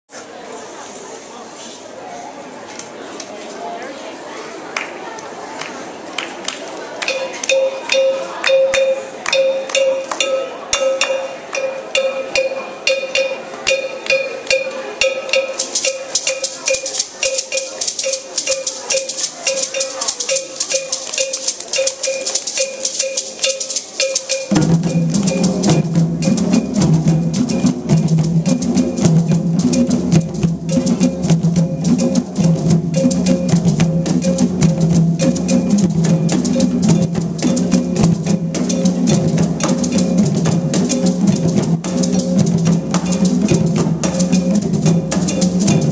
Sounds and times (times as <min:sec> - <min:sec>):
Speech: 0:00.1 - 0:24.5
Inside, large room or hall: 0:00.1 - 0:45.9
Musical instrument: 0:07.1 - 0:45.9.